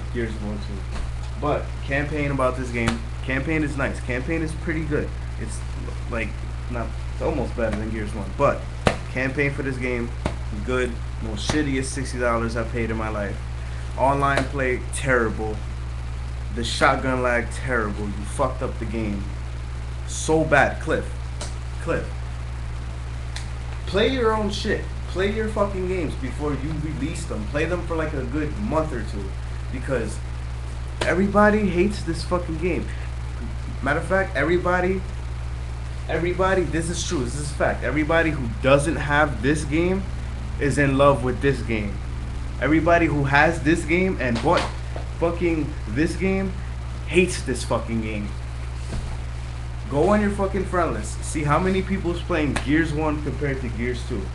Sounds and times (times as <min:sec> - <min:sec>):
Speech: 0:00.0 - 0:13.4, 0:14.0 - 0:15.6, 0:16.5 - 0:19.4, 0:20.1 - 0:21.2, 0:21.8 - 0:22.2, 0:23.9 - 0:30.2, 0:31.0 - 0:32.9, 0:33.8 - 0:35.1, 0:36.1 - 0:42.0, 0:42.6 - 0:48.4, 0:49.9 - 0:54.3.